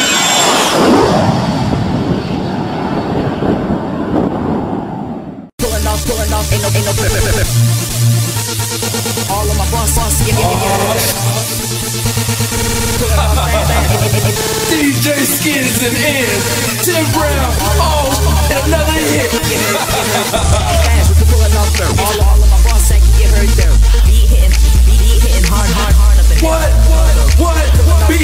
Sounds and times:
Pop music: 0:05.6 - 0:28.2.

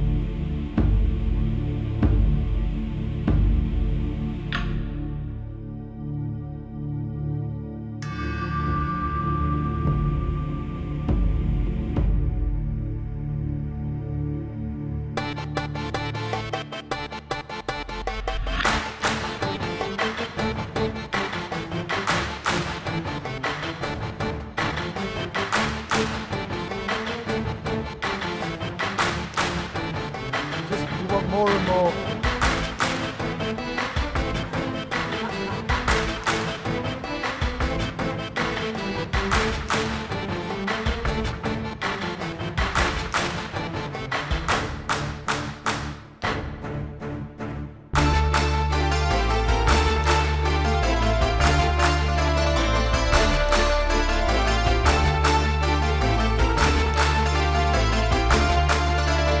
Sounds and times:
Ambient music: 0:00.0 - 0:59.4.

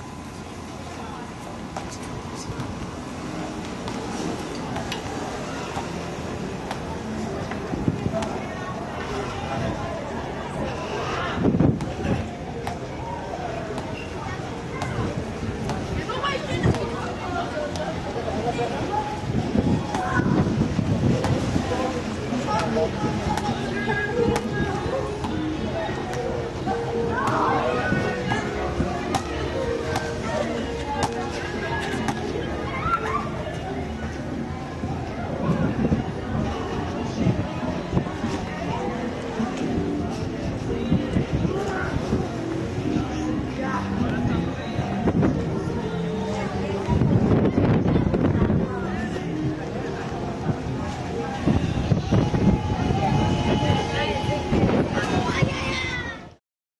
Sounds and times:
Wind noise (microphone): 0:11.3 - 0:12.3, 0:18.7 - 0:21.9, 0:34.8 - 0:38.4, 0:44.0 - 0:45.8, 0:46.8 - 0:49.6, 0:50.4 - 0:56.4.

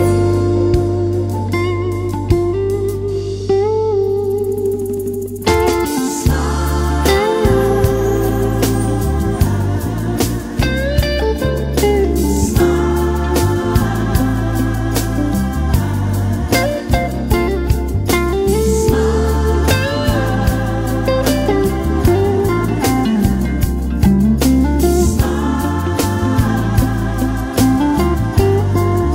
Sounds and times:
Soul music: 0:00.0 - 0:29.1.

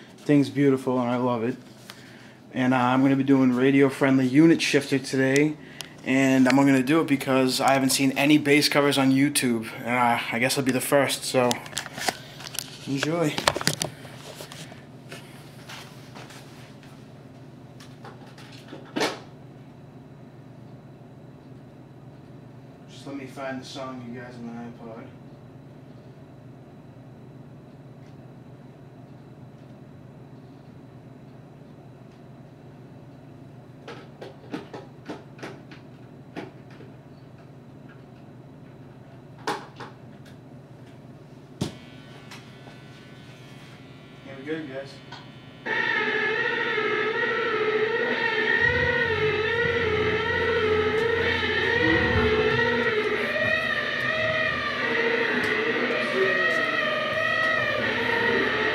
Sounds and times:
Speech: 0:00.2 - 0:01.6, 0:02.5 - 0:11.7, 0:12.8 - 0:13.5, 0:22.9 - 0:25.2, 0:44.2 - 0:45.1.

